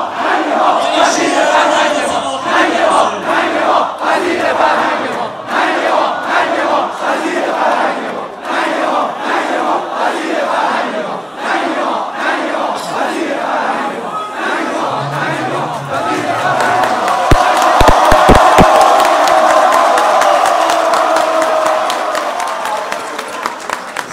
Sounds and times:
Speech: 0:00.5 - 0:03.9, 0:12.6 - 0:17.0.

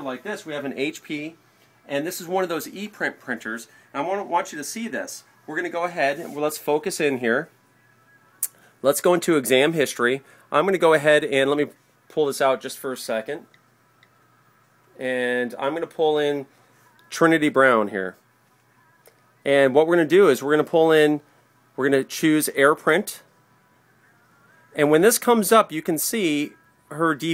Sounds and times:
Speech: 0:00.0 - 0:07.5, 0:08.8 - 0:13.5, 0:15.0 - 0:16.5, 0:17.1 - 0:18.2, 0:19.5 - 0:21.2, 0:21.8 - 0:23.3, 0:24.8 - 0:27.3.

